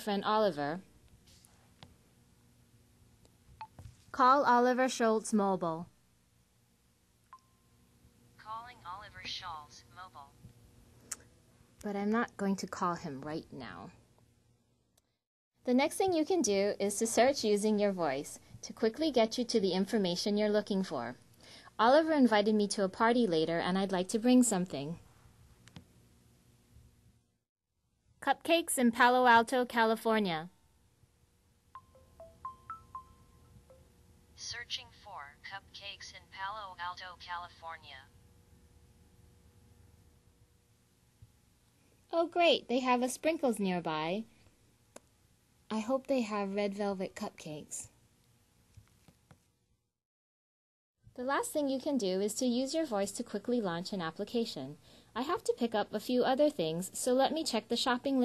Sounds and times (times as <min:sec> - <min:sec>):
Speech synthesizer: 0:08.4 - 0:10.3, 0:34.4 - 0:38.1.